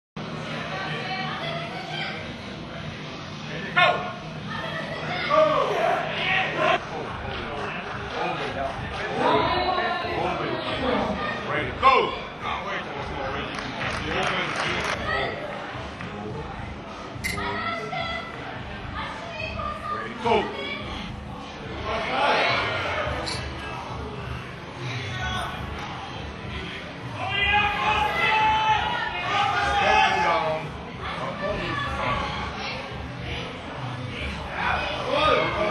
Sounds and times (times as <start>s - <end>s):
Inside, large room or hall: 0.2s - 35.7s.